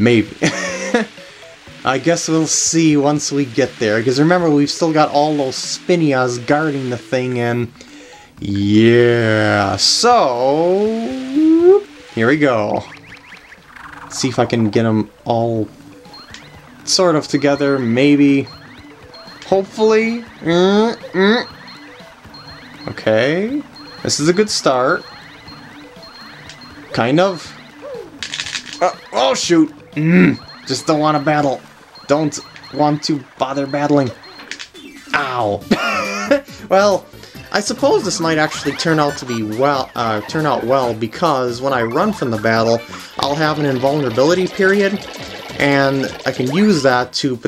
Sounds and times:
Speech: 0.0 - 0.4, 1.9 - 7.7, 8.4 - 12.9, 14.1 - 15.7, 16.9 - 18.5, 19.5 - 21.5, 22.9 - 25.0, 27.0 - 27.5, 28.8 - 34.2, 36.7 - 45.0, 45.6 - 47.4
Music: 0.0 - 47.4.

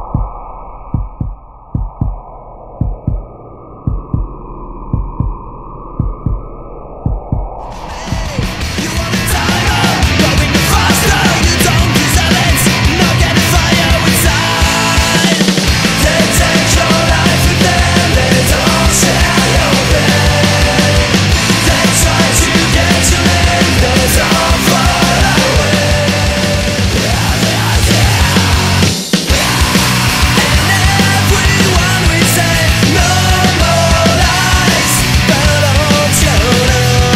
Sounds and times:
Heart sounds, heartbeat: 0.0 - 8.4
Music: 7.7 - 37.1.

